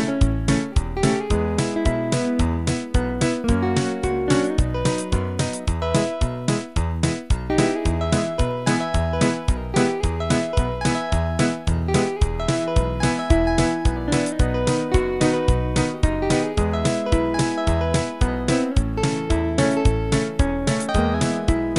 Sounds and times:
Musical instrument: 0.0 - 21.7.

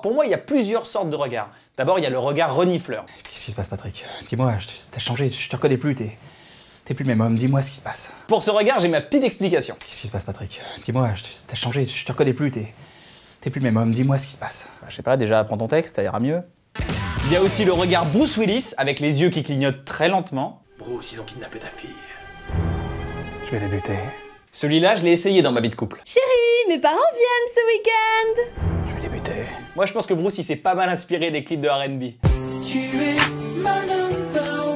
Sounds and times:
Speech: 6.9 - 12.7, 17.2 - 22.0, 23.5 - 28.4, 29.0 - 32.2
Music: 16.8 - 18.4, 20.7 - 24.5, 28.3 - 29.9, 32.2 - 34.7.

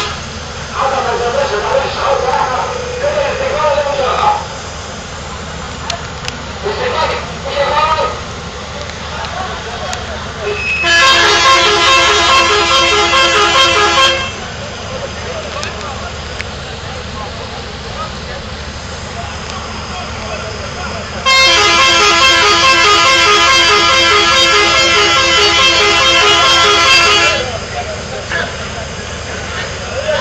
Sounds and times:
Vehicle: 0.0 - 30.2
Speech: 0.8 - 4.5, 6.6 - 8.2, 14.6 - 21.2, 27.3 - 30.2.

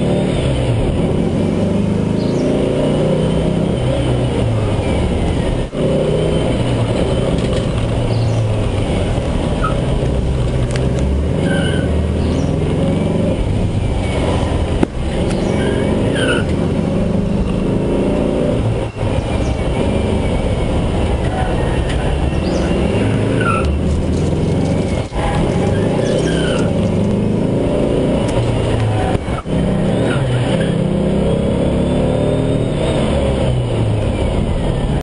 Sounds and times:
Bus: 0.0 - 35.0.

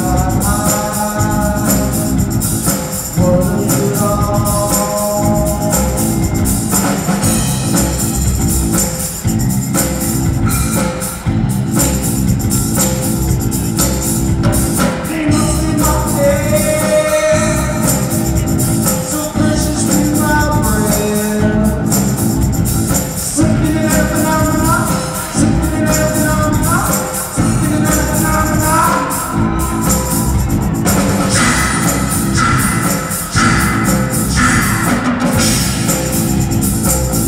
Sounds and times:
Music: 0.0 - 37.2.

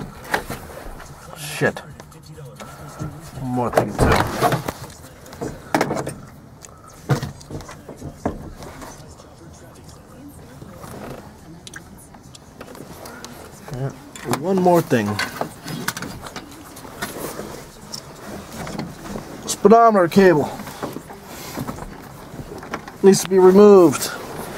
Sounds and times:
Car: 0.0 - 24.5
Speech: 1.0 - 5.7, 7.4 - 15.4, 19.4 - 20.9, 23.0 - 24.5.

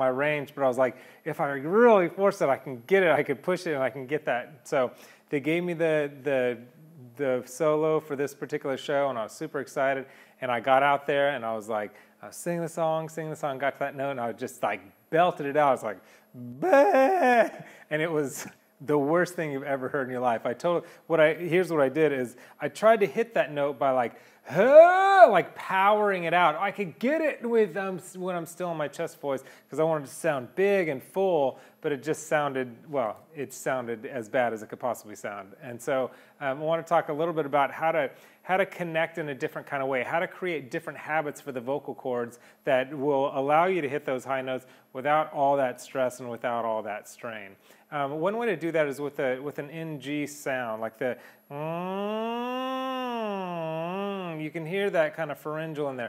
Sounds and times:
Speech: 0.0 - 56.0.

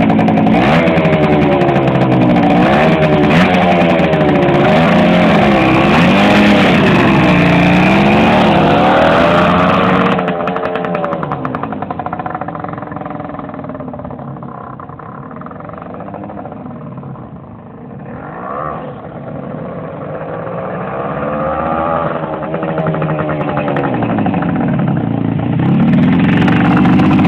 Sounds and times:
Motorcycle: 0.0 - 27.2
Outside, urban or manmade: 0.0 - 27.2.

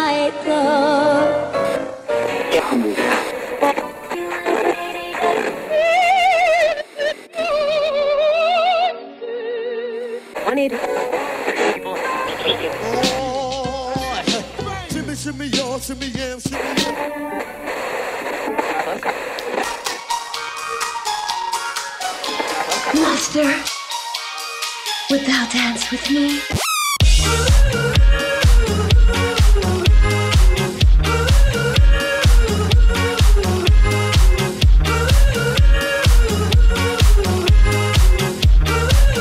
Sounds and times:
Music: 0.0 - 39.2.

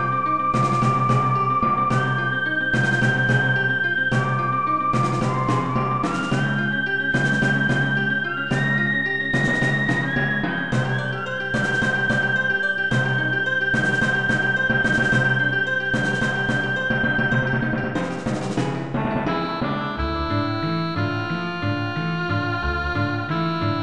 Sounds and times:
Music: 0.0 - 23.8.

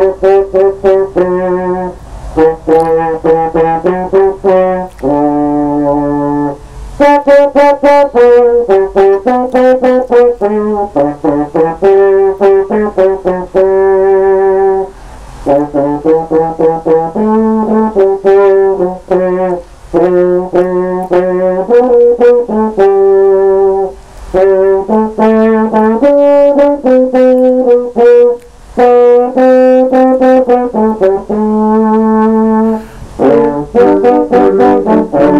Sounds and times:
Brass instrument: 0.0 - 35.3.

